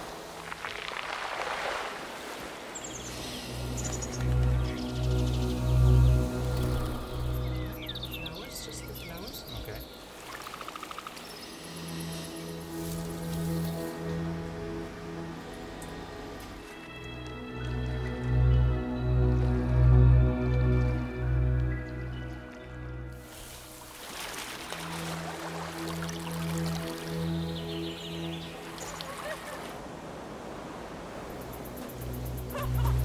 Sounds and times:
Music: 0:03.0 - 0:29.1, 0:31.5 - 0:33.0.

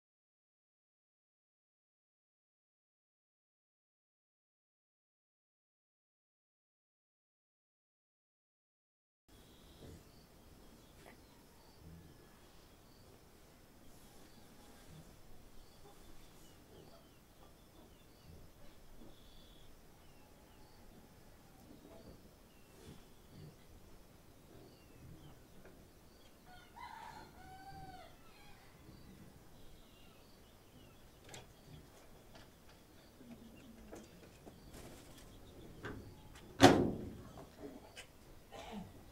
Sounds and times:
Chicken, rooster: 0:26.4 - 0:29.3.

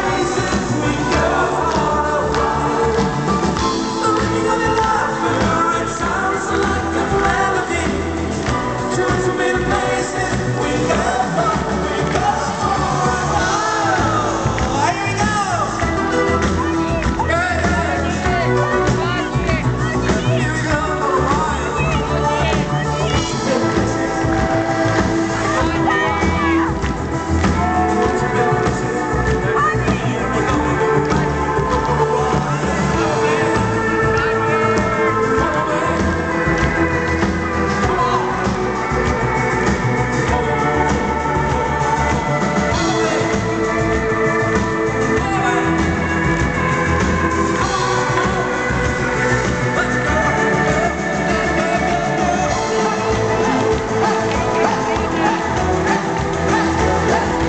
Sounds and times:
Cheering: 0:00.0 - 0:57.4
Music: 0:00.0 - 0:57.4.

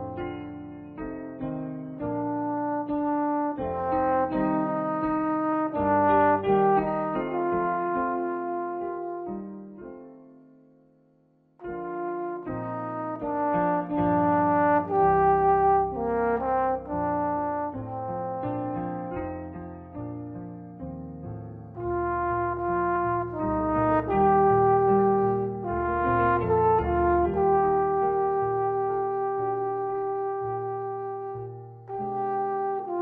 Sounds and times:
Music: 0:00.0 - 0:33.0.

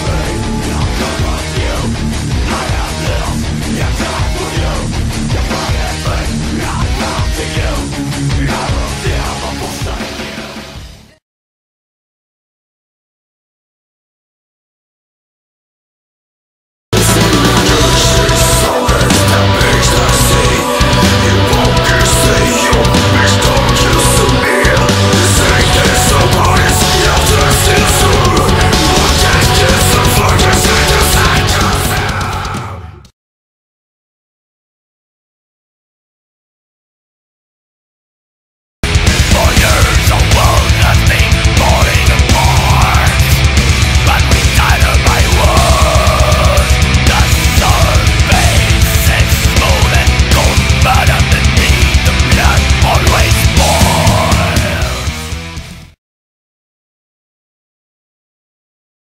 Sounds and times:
Singing: 0:00.0 - 0:10.8, 0:17.0 - 0:33.1, 0:39.2 - 0:55.2
Heavy metal: 0:00.0 - 0:11.2, 0:16.9 - 0:33.1, 0:38.8 - 0:56.0.

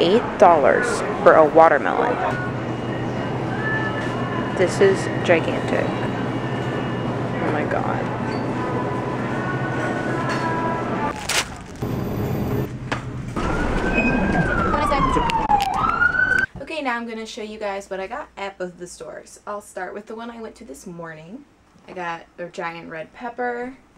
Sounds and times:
Police car (siren): 0:13.4 - 0:16.5.

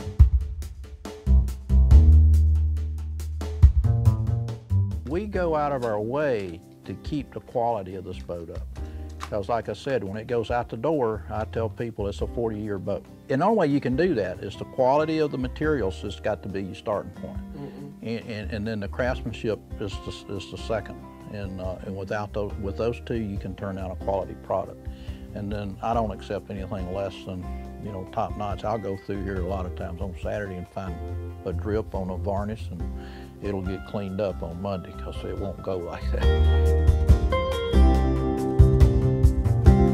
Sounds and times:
Music: 0:00.0 - 0:39.9
Speech: 0:05.0 - 0:08.6, 0:09.3 - 0:24.8, 0:25.4 - 0:36.3.

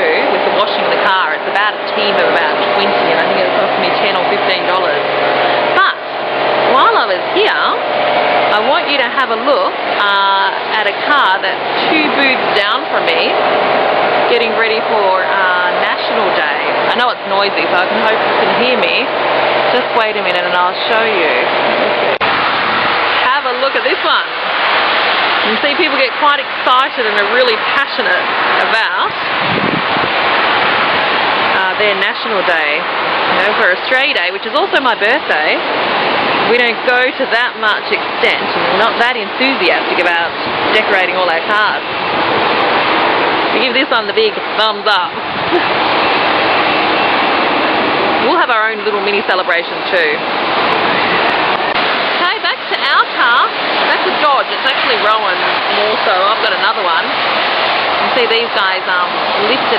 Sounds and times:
Speech: 0:00.0 - 0:05.1, 0:05.7 - 0:06.0, 0:06.7 - 0:07.8, 0:08.5 - 0:13.4, 0:14.3 - 0:19.1, 0:19.7 - 0:21.5, 0:23.2 - 0:24.3, 0:25.4 - 0:29.2, 0:31.6 - 0:35.6, 0:36.5 - 0:41.8, 0:43.6 - 0:45.7, 0:48.2 - 0:50.2, 0:52.2 - 0:57.1, 0:58.0 - 0:59.7.

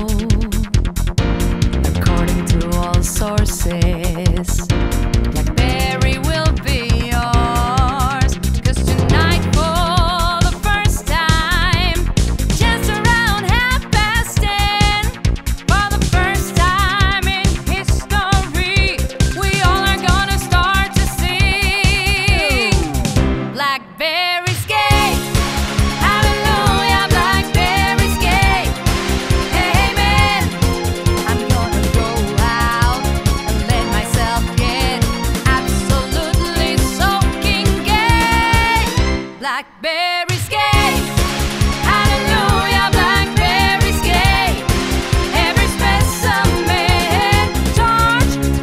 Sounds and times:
Exciting music: 0:04.6 - 0:39.4, 0:40.3 - 0:48.6.

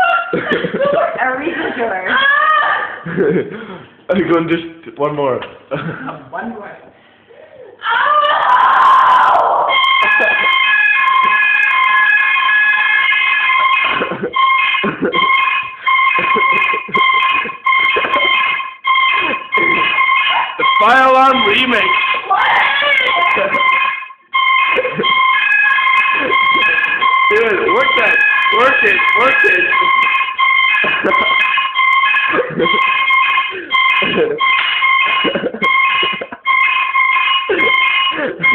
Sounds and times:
Buzzer: 0:09.7 - 0:38.5.

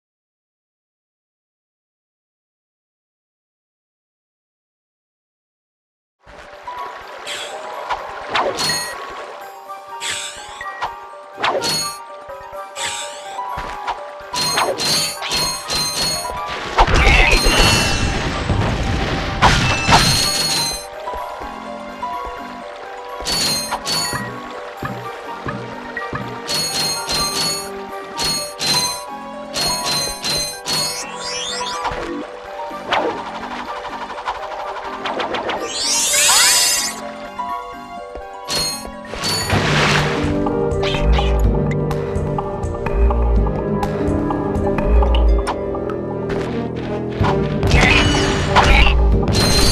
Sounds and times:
Music: 0:06.2 - 0:49.7.

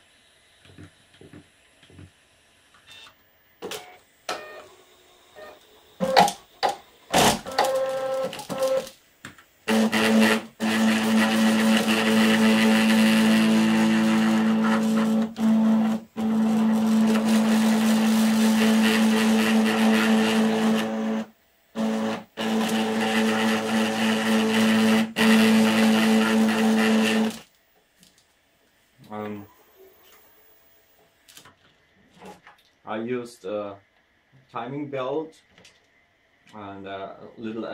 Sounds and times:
Inside, small room: 0:00.0 - 0:37.7.

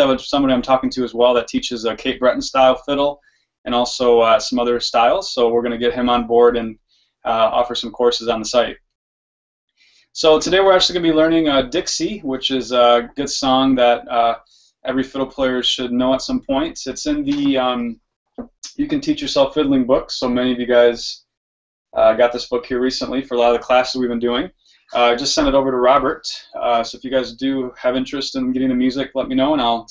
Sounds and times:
Speech: 0:00.0 - 0:09.0, 0:10.2 - 0:21.4, 0:22.0 - 0:29.9.

